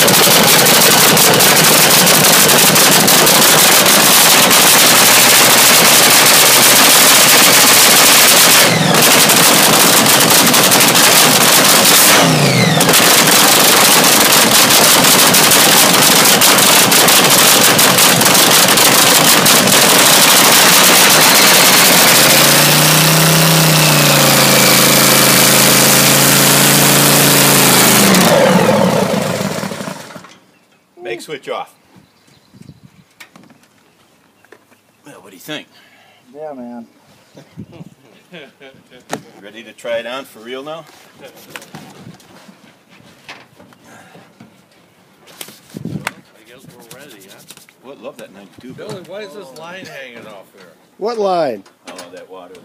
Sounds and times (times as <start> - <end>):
Accelerating, revving, vroom: 11.0 - 13.3, 19.8 - 29.6.